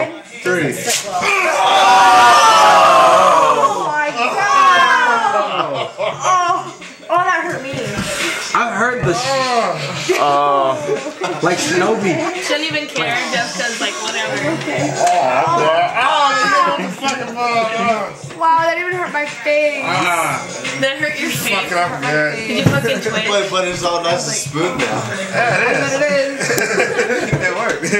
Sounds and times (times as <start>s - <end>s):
Music: 0.0s - 27.9s.